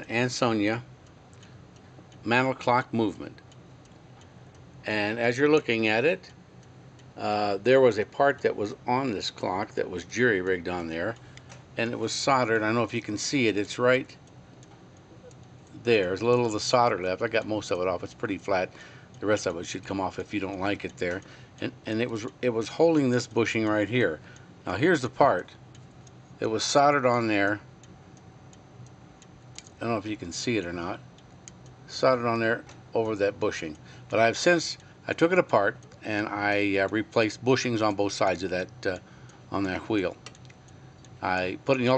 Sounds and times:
Speech: 0.0 - 0.9, 2.2 - 3.4, 4.9 - 6.3, 7.2 - 11.2, 11.8 - 14.2, 15.8 - 25.6, 26.4 - 27.7, 29.8 - 31.0, 31.9 - 40.2, 41.2 - 41.9.

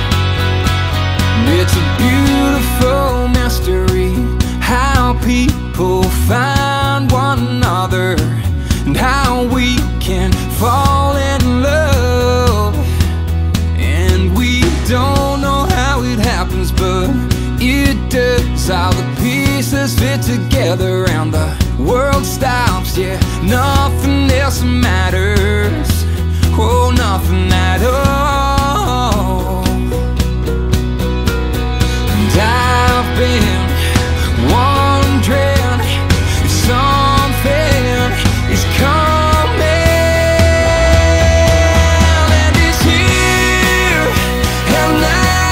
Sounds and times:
Music: 0.0 - 45.5.

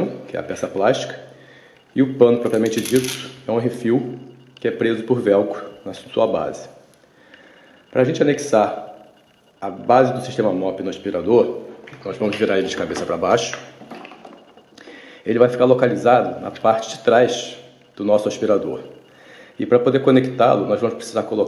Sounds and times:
Speech: 0.0 - 1.3, 2.0 - 6.8, 7.9 - 8.9, 9.6 - 13.7, 15.3 - 19.0, 19.6 - 21.4.

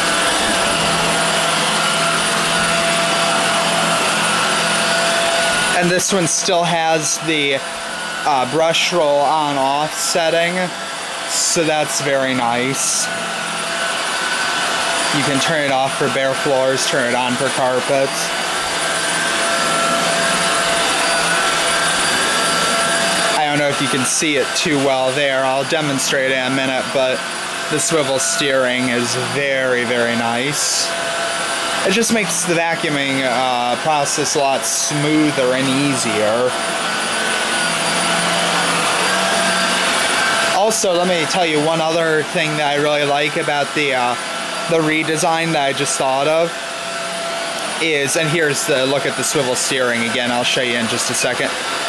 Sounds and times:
Vacuum cleaner: 0.0 - 51.8.

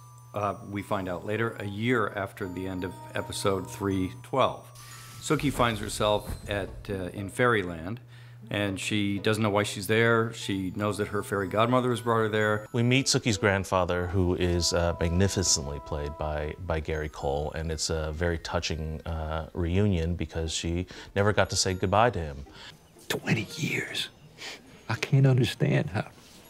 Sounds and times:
Speech: 0.4 - 4.6, 5.2 - 22.4, 24.9 - 26.1.

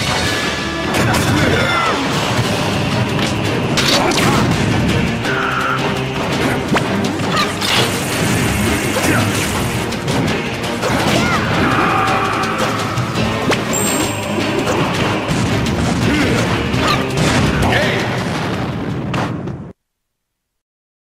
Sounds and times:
Music: 0.0 - 19.8
Speech: 1.0 - 2.1, 17.6 - 18.2.

